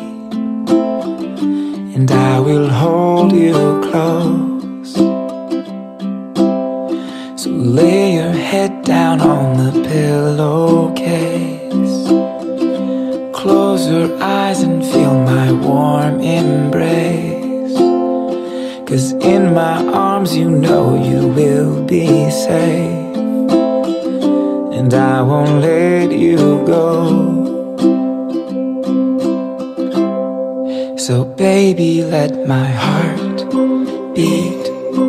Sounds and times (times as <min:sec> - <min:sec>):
Music: 0:00.0 - 0:35.0.